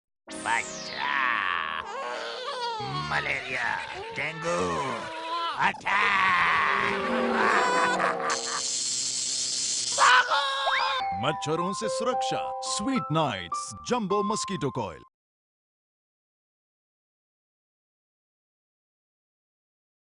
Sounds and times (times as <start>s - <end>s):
Music: 0.3s - 1.9s, 10.8s - 15.1s
Speech: 2.8s - 6.0s, 11.1s - 15.1s.